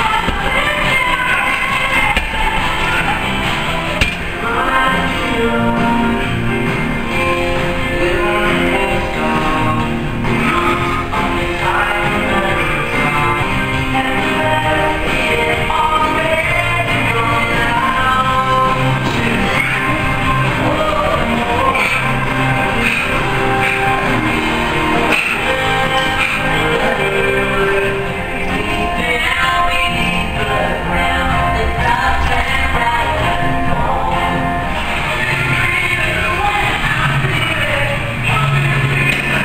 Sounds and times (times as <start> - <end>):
Music: 0.0 - 39.4.